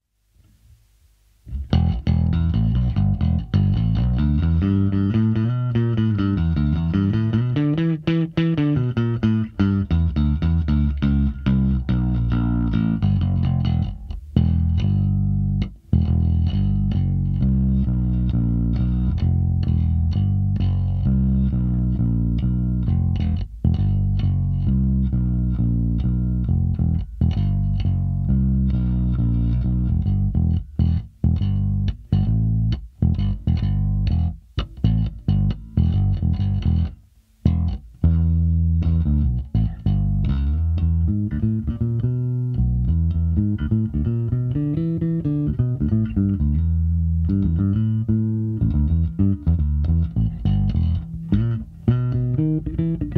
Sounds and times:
Music: 0:01.4 - 0:53.1.

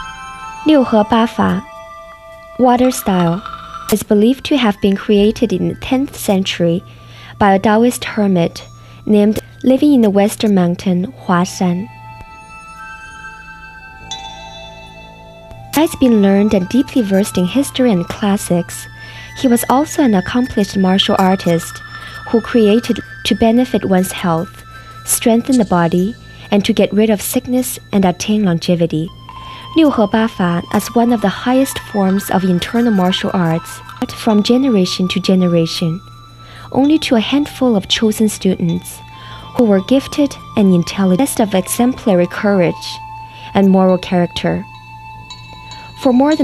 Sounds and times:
Music: 0:00.0 - 0:46.4
Speech: 0:00.7 - 0:01.6, 0:02.6 - 0:06.8, 0:07.4 - 0:11.9, 0:15.8 - 0:24.5, 0:25.1 - 0:29.1, 0:29.8 - 0:36.0, 0:36.7 - 0:39.0, 0:39.6 - 0:43.0, 0:43.6 - 0:44.6, 0:46.0 - 0:46.4.

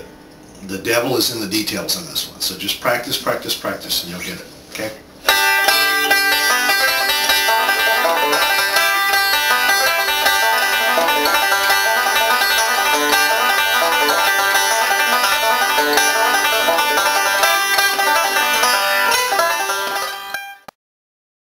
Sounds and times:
Bluegrass: 0:05.2 - 0:20.6
Banjo: 0:05.2 - 0:20.7.

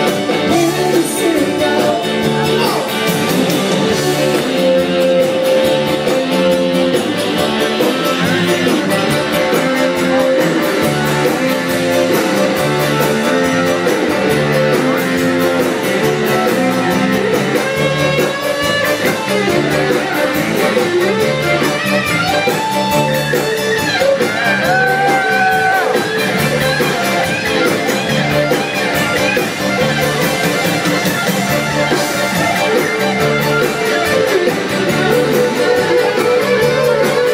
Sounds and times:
Music of Latin America: 0:00.0 - 0:37.3.

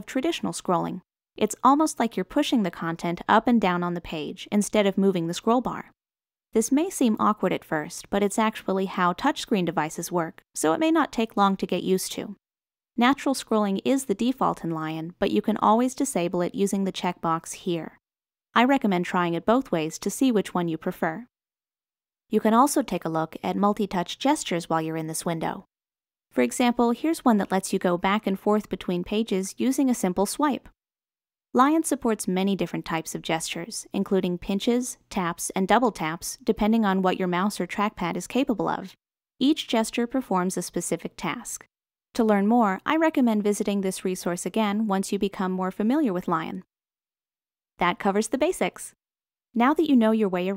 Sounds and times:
Speech: 0:00.0 - 0:05.9, 0:06.6 - 0:12.4, 0:13.0 - 0:18.0, 0:18.6 - 0:21.3, 0:22.3 - 0:25.7, 0:26.4 - 0:30.7, 0:31.6 - 0:41.6, 0:42.2 - 0:46.7, 0:47.8 - 0:49.0, 0:49.6 - 0:50.5.

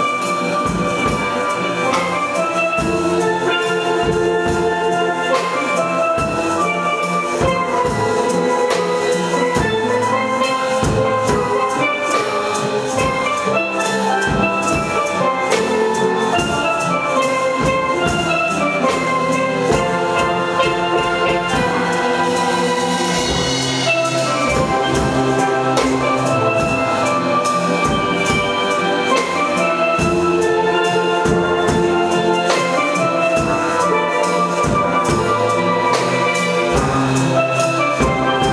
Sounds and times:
Drum: 0:00.0 - 0:38.5
Steelpan: 0:00.0 - 0:38.5.

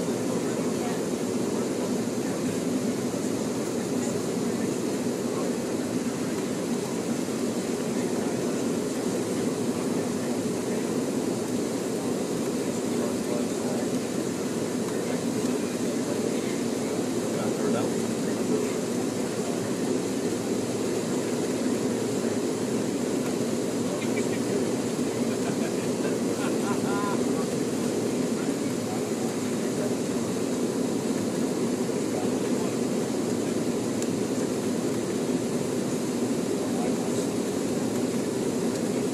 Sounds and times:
Speech: 0:00.0 - 0:11.6, 0:12.4 - 0:30.5, 0:31.9 - 0:35.6, 0:36.5 - 0:39.1.

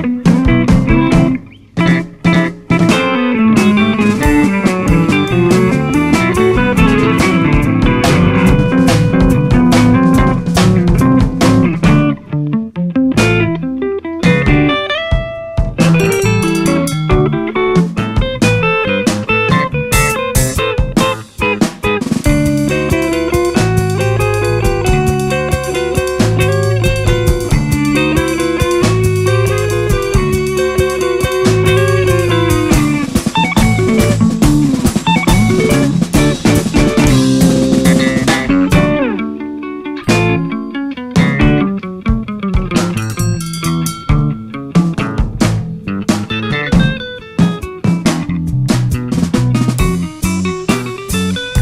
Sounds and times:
Soundtrack music: 0:03.6 - 0:11.6
Theme music: 0:04.0 - 0:11.1, 0:15.9 - 0:18.0.

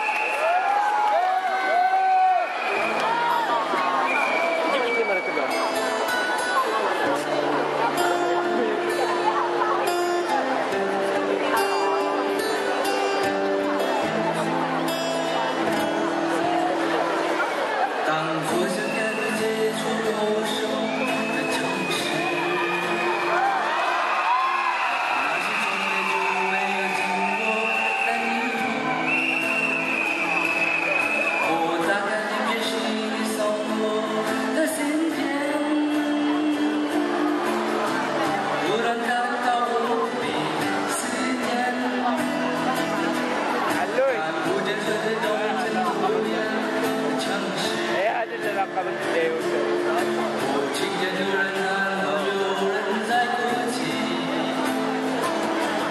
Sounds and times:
Music: 0:00.0 - 0:55.9
Speech: 0:04.6 - 0:20.8, 0:31.5 - 0:55.9
Male singing: 0:18.0 - 0:23.6, 0:25.2 - 0:29.2, 0:31.4 - 0:37.7, 0:38.6 - 0:42.4, 0:44.0 - 0:48.0, 0:50.4 - 0:54.8.

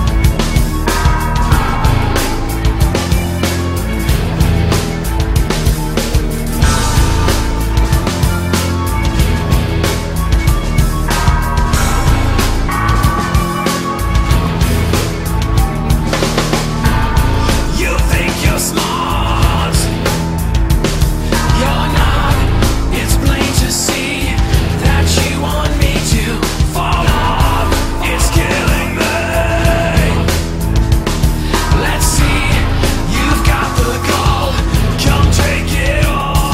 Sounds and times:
Music: 0:00.0 - 0:36.5.

